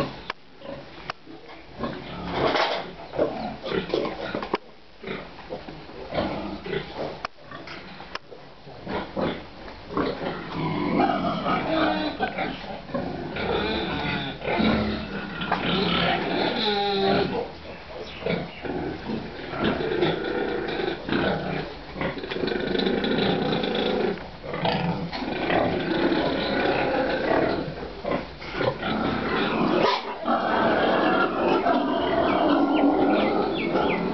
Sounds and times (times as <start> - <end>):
Oink: 0.0 - 8.0, 8.7 - 34.1.